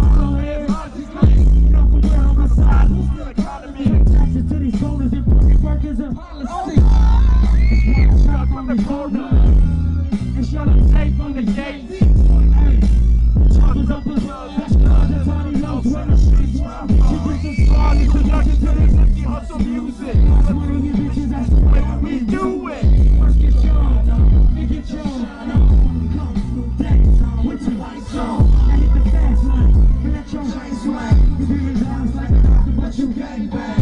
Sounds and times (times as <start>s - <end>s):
Music: 0.0s - 33.8s.